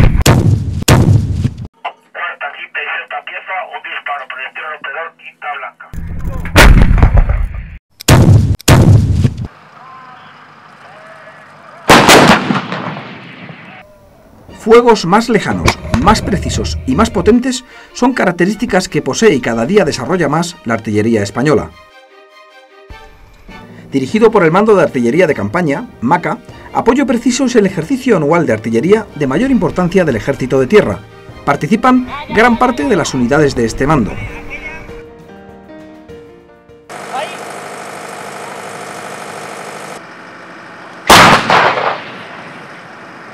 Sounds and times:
Speech: 1.9s - 6.5s, 24.0s - 34.9s
Music: 14.4s - 36.9s.

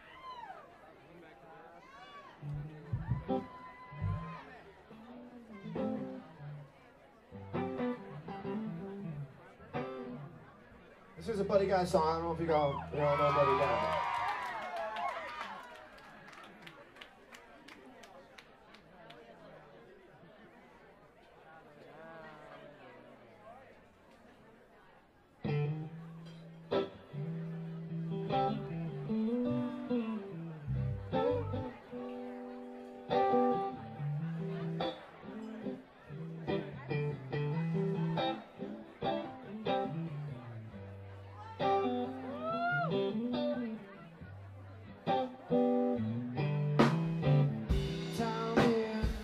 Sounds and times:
Speech: 0.6s - 14.1s, 16.3s - 46.5s
Music: 2.4s - 10.4s, 25.5s - 49.2s.

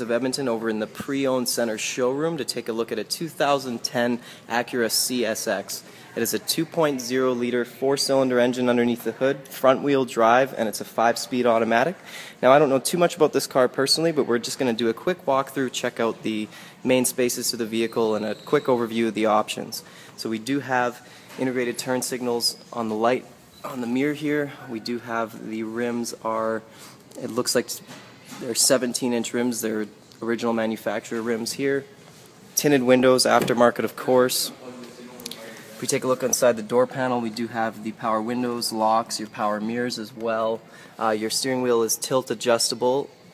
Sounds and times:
Speech: 0.0s - 31.9s, 32.6s - 43.3s.

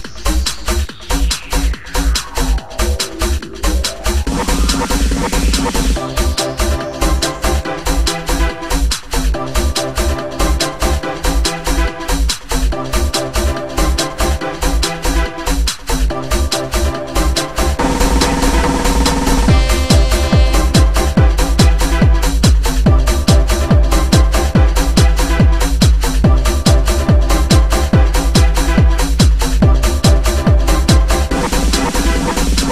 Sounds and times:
Electronic dance music: 0.0s - 32.7s
Trance music: 0.0s - 32.7s.

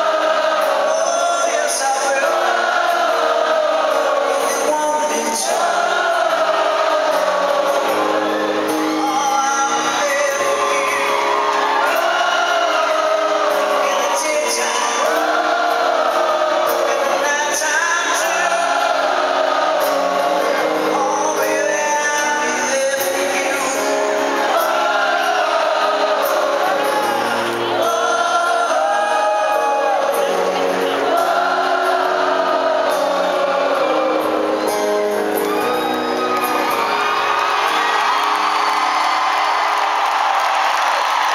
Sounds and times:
Male singing: 0.0s - 35.0s
Music: 0.0s - 41.3s.

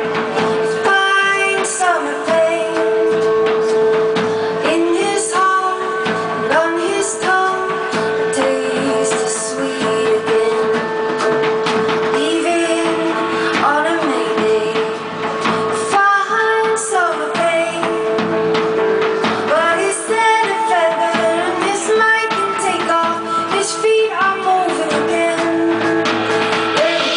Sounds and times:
Music: 0.0s - 27.1s.

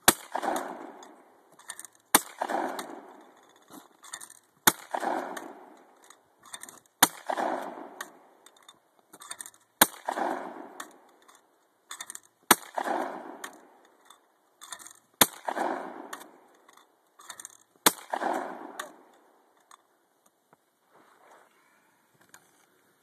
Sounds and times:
Gunshot, gunfire: 0.1s - 1.0s, 2.1s - 3.1s, 4.7s - 5.7s, 7.0s - 8.0s, 9.8s - 10.8s, 12.5s - 13.5s, 15.2s - 16.2s, 17.9s - 19.0s.

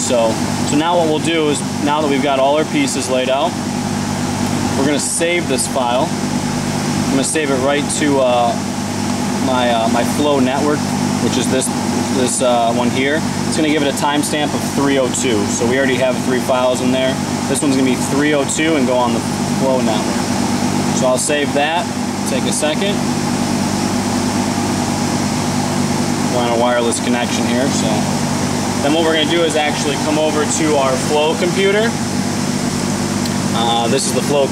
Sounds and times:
Speech: 0.0s - 3.6s, 4.8s - 6.2s, 7.1s - 8.6s, 9.4s - 20.3s, 21.0s - 23.0s, 26.3s - 28.2s, 28.8s - 32.0s, 33.5s - 34.5s
Mechanical fan: 0.0s - 34.5s.

